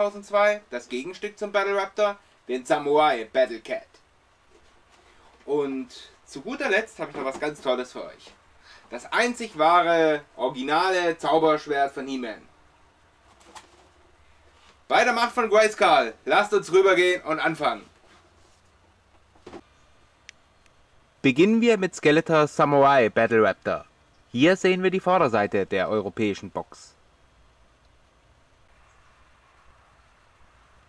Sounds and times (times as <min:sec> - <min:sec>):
Speech: 0:00.0 - 0:04.0, 0:05.4 - 0:12.5, 0:14.9 - 0:17.9, 0:21.2 - 0:27.0.